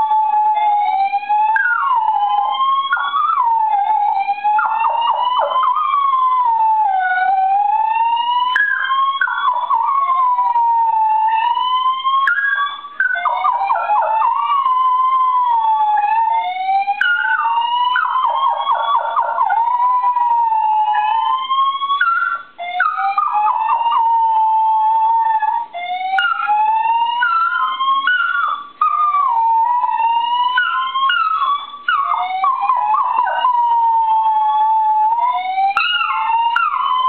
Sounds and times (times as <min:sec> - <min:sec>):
Whimper (dog): 0:00.0 - 0:37.0
Yip: 0:00.0 - 0:37.0.